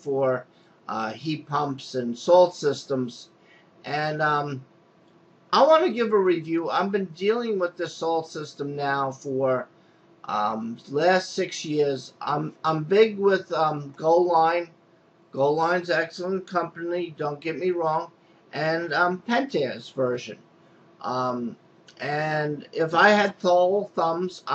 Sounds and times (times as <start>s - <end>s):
Speech: 0.0s - 4.6s, 5.5s - 9.7s, 10.3s - 14.8s, 15.4s - 20.4s, 21.0s - 24.5s.